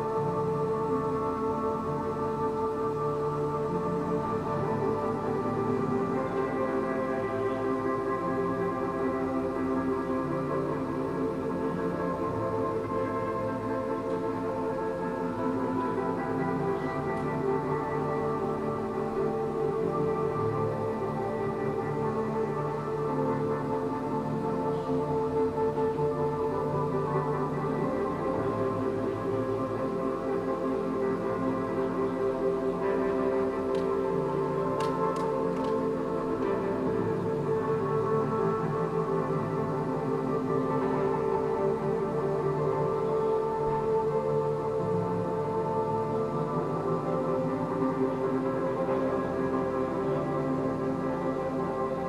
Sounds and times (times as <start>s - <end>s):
Ambient music: 0.0s - 52.0s.